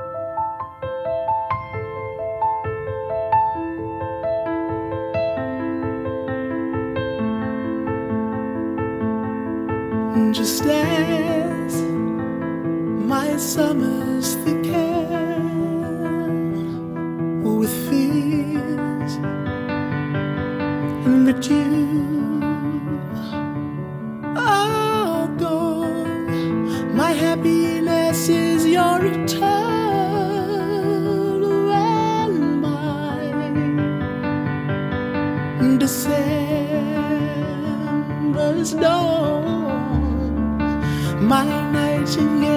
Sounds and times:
Christian music: 0:00.0 - 0:42.5.

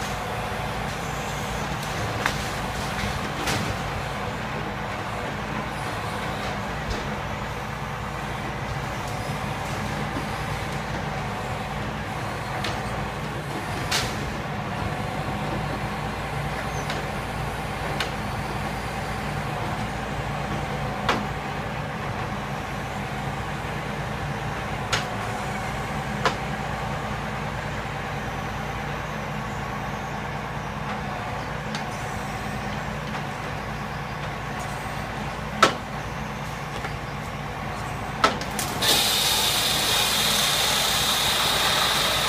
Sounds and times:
Truck: 0:00.0 - 0:42.2.

